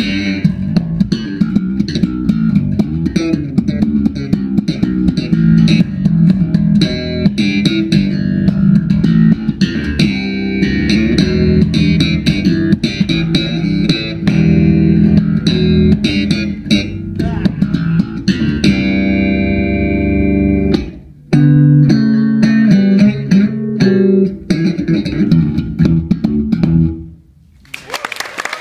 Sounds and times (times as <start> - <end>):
Bass guitar: 0.0 - 27.7.